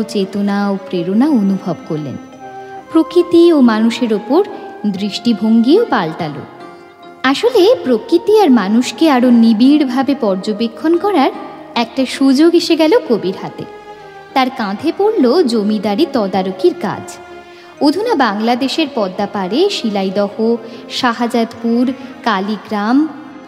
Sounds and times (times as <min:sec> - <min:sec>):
Speech: 0:00.0 - 0:02.2, 0:02.9 - 0:06.5, 0:07.3 - 0:13.7, 0:14.4 - 0:17.2, 0:17.8 - 0:23.2
Music: 0:00.0 - 0:23.4.